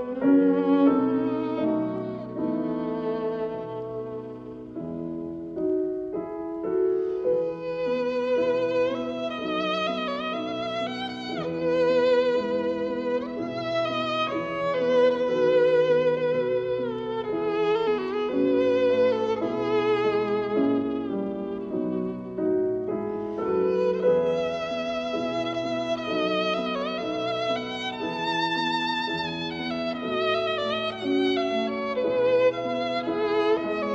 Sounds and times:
Violin, fiddle: 0.0 - 33.9.

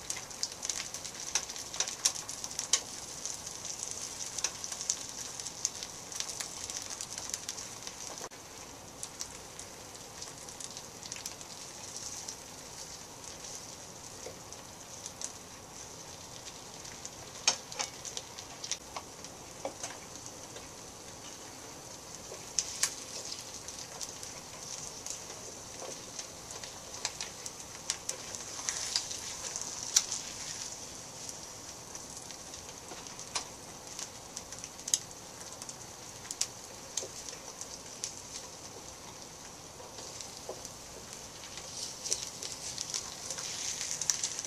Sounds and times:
Frying (food): 0.0 - 44.4
Sizzle: 0.0 - 44.4.

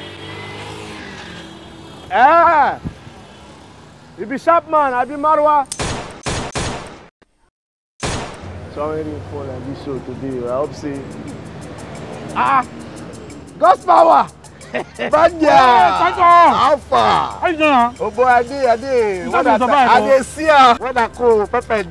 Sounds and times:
Gunshot, gunfire: 5.8 - 7.1, 8.0 - 8.4.

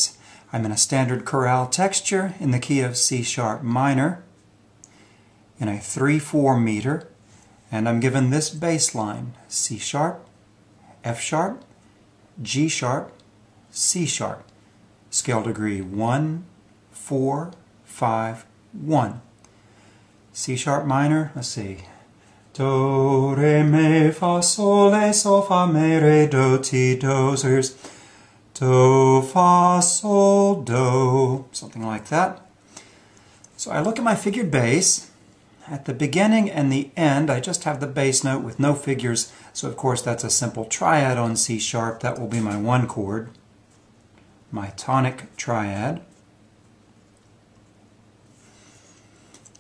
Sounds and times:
Speech: 0.0 - 4.3, 5.6 - 10.3, 11.0 - 11.7, 12.4 - 14.5, 15.1 - 19.3, 20.4 - 21.9, 28.6 - 32.5, 33.6 - 43.4, 44.5 - 46.1.

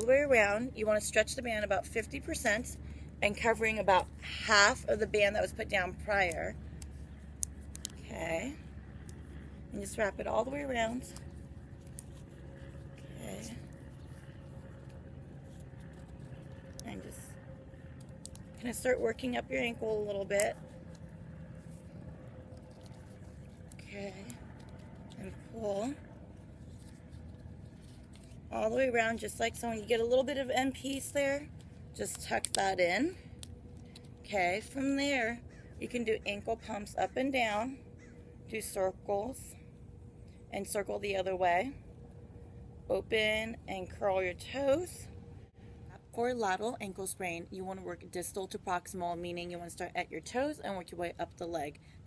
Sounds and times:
Speech: 0.0 - 6.6, 8.0 - 8.6, 9.7 - 11.1, 13.1 - 13.6, 16.8 - 17.3, 18.6 - 20.6, 23.8 - 24.4, 25.2 - 26.0, 28.5 - 33.2, 34.3 - 37.8, 38.5 - 39.6, 40.5 - 41.8, 42.9 - 45.1, 46.0 - 51.8.

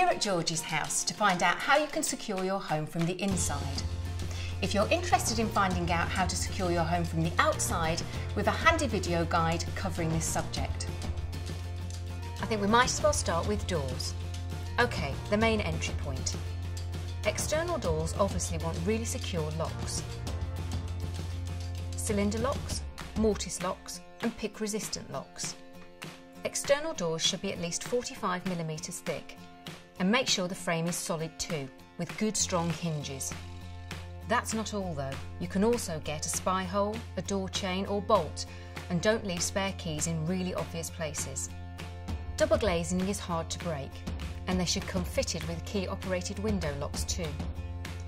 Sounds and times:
Speech: 0.0 - 3.8, 4.5 - 10.9, 12.4 - 14.2, 14.8 - 16.4, 17.2 - 20.1, 22.0 - 25.6, 26.4 - 29.4, 30.0 - 33.4, 34.3 - 41.5, 42.4 - 47.4
Music: 0.0 - 48.0.

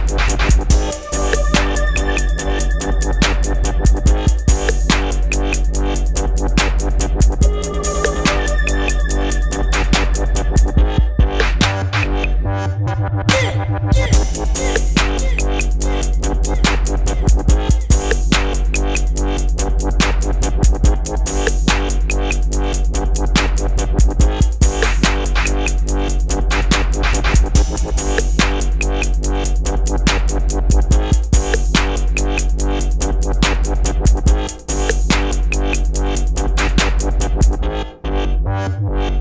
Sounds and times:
Electronic music: 0.0 - 39.2.

